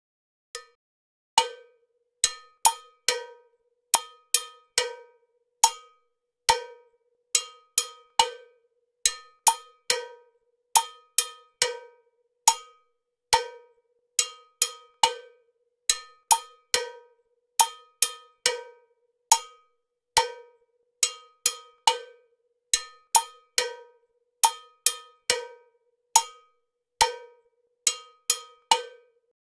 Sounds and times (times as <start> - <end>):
Cowbell: 1.4 - 29.4.